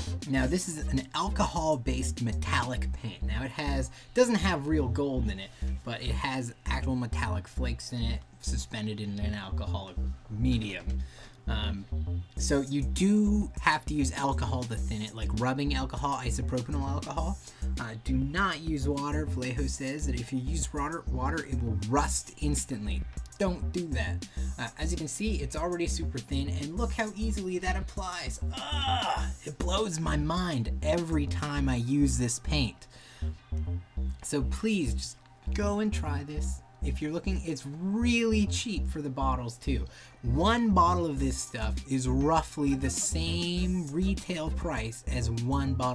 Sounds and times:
Speech: 0.0 - 32.9, 34.2 - 45.9
Music: 0.0 - 45.9.

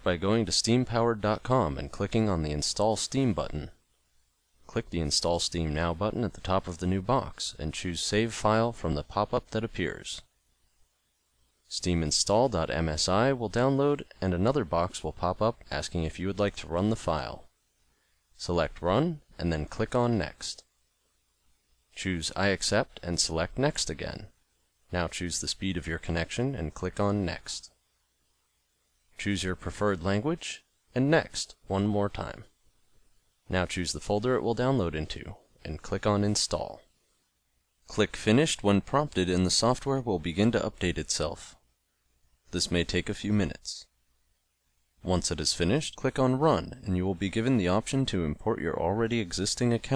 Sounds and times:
Speech: 0.0 - 3.8, 4.7 - 10.3, 11.7 - 17.5, 18.4 - 20.7, 22.0 - 27.8, 29.2 - 32.5, 33.5 - 36.9, 37.9 - 41.6, 42.5 - 43.9, 45.0 - 49.9.

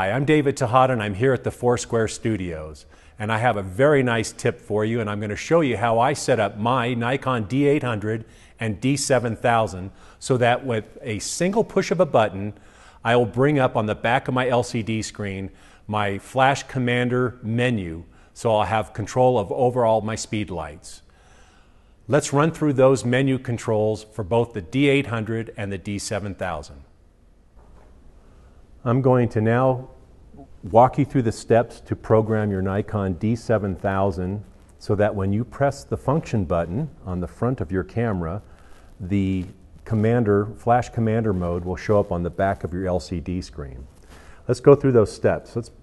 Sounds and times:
Speech: 0.0 - 21.1, 22.1 - 26.9, 28.8 - 43.9, 44.5 - 45.8.

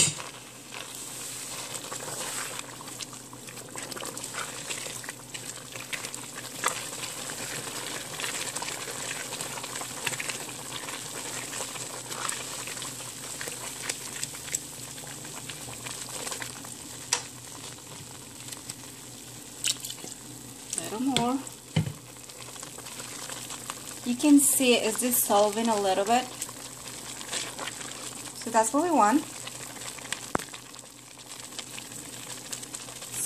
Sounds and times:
Stir: 0.0 - 16.5, 26.3 - 28.2
Sizzle: 0.0 - 33.2.

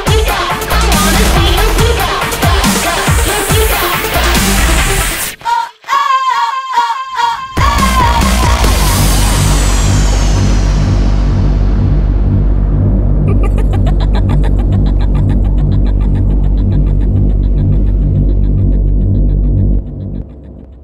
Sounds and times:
Music: 0.0 - 20.8.

